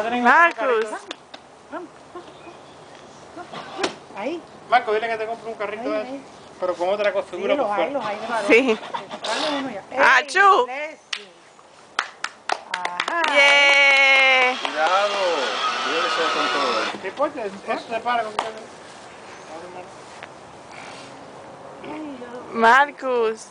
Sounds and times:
Vehicle: 0.0s - 23.5s.

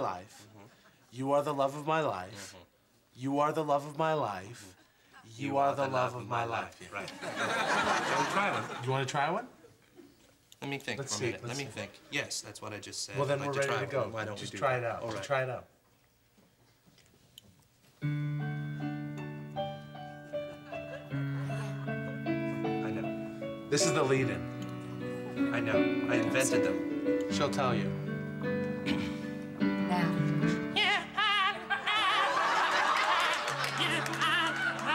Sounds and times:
Music: 18.0s - 34.9s.

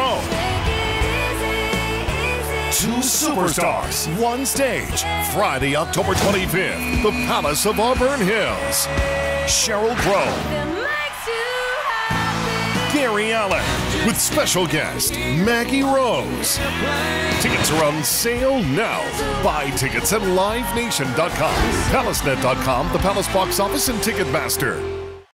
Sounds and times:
Music: 0.0s - 25.3s
Speech: 2.7s - 8.9s, 9.5s - 10.4s, 12.9s - 16.5s, 17.4s - 24.9s.

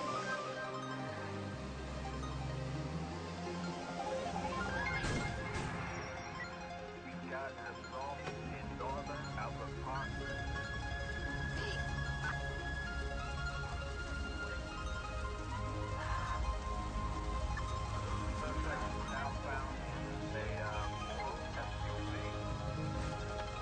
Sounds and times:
Music: 0.0s - 23.6s
Speech: 7.0s - 10.4s, 11.6s - 12.4s, 18.4s - 22.4s.

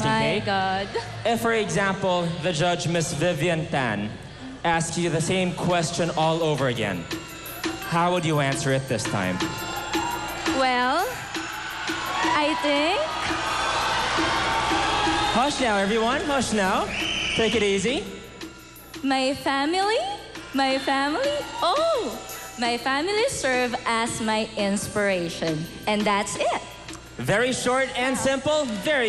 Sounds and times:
Music: 0.0s - 29.0s.

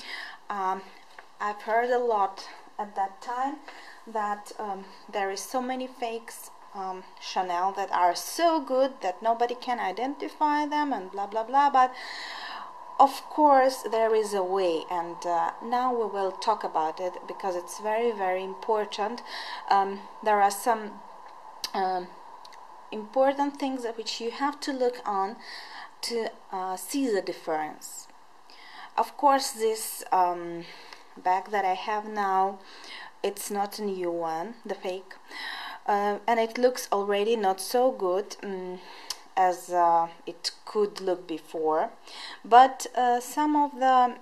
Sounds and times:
Speech: 0.0s - 12.0s, 13.0s - 21.0s, 21.7s - 22.2s, 22.9s - 28.1s, 28.9s - 35.2s, 35.8s - 44.2s.

